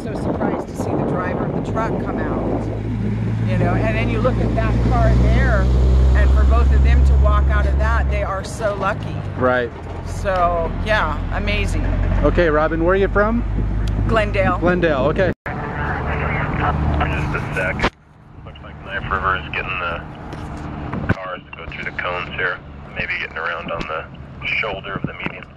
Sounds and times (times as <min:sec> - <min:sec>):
Speech: 0:00.0 - 0:02.6, 0:03.5 - 0:05.6, 0:06.2 - 0:13.4, 0:14.1 - 0:17.9, 0:18.5 - 0:20.0, 0:21.2 - 0:25.5
Truck: 0:00.0 - 0:25.5.